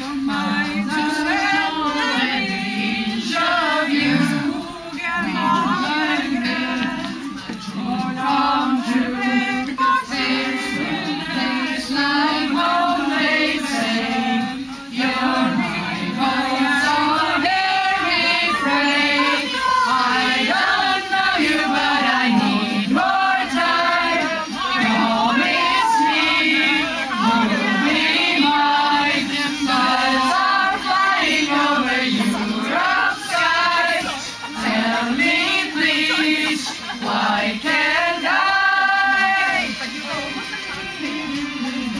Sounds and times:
Female singing: 0.0 - 41.9.

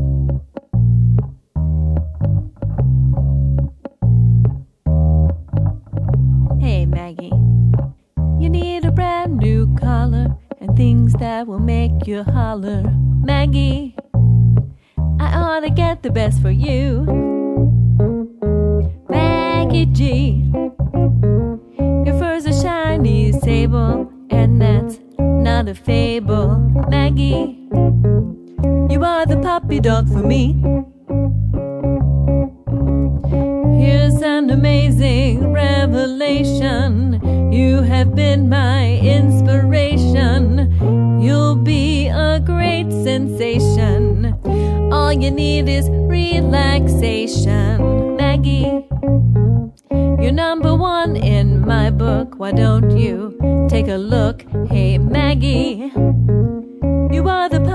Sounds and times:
Music: 0.0 - 57.7.

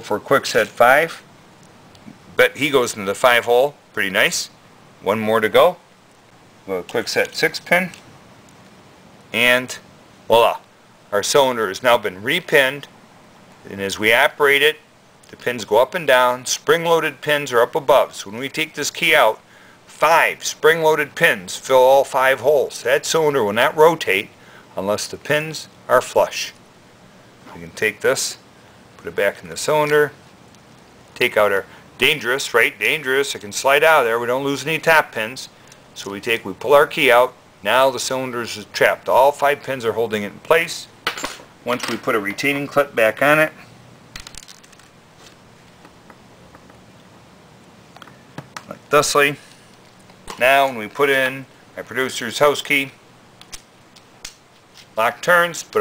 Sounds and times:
Speech: 0.0 - 1.3, 2.3 - 5.8, 6.7 - 8.0, 9.3 - 12.9, 13.6 - 26.6, 27.5 - 28.4, 29.0 - 30.2, 31.2 - 41.0, 41.6 - 43.6, 48.6 - 49.5, 50.3 - 53.0, 55.0 - 55.8
Inside, small room: 0.0 - 55.8.

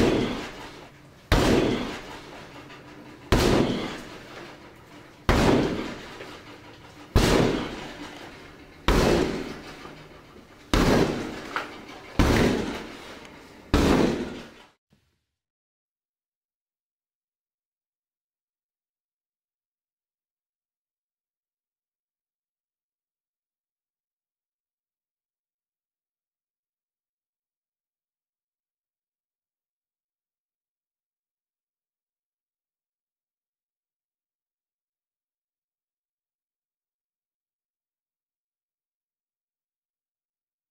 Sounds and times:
Door: 0.0 - 14.7.

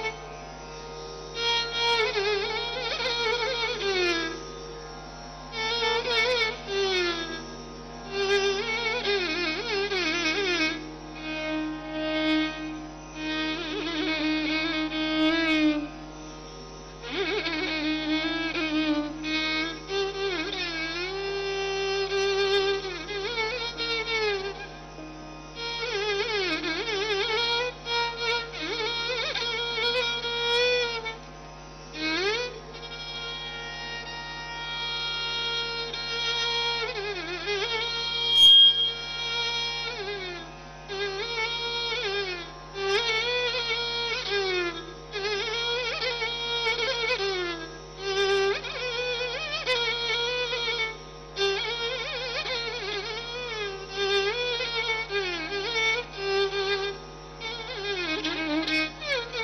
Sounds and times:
Violin, fiddle: 0.0 - 59.4.

